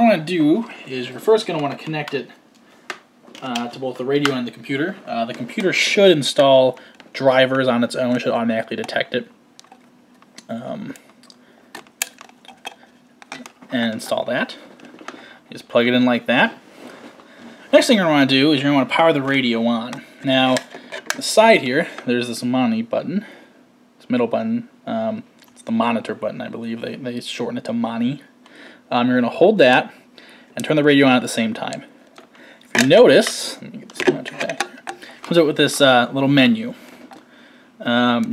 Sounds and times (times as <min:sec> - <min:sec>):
Speech: 0:00.0 - 0:02.4, 0:03.4 - 0:09.3, 0:10.4 - 0:11.0, 0:13.7 - 0:14.6, 0:15.5 - 0:16.6, 0:17.7 - 0:23.3, 0:24.0 - 0:28.3, 0:28.9 - 0:30.0, 0:30.6 - 0:31.9, 0:32.8 - 0:34.7, 0:35.3 - 0:36.8, 0:37.8 - 0:38.3.